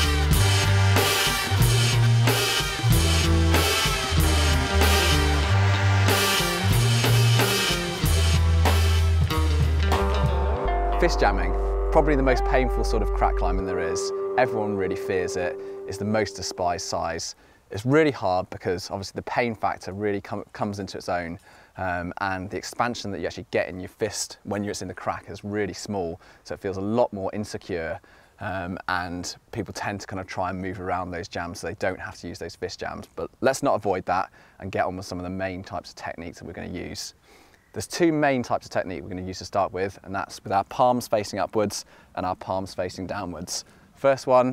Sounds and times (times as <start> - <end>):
Speech: 11.0 - 44.5.